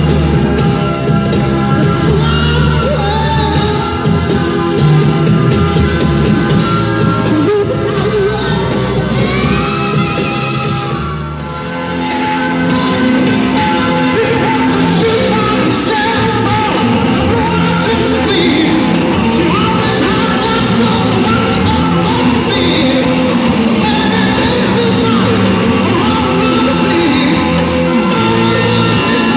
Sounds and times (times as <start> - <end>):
Heavy metal: 0.0 - 29.3
Singing: 1.7 - 4.0, 6.5 - 29.3.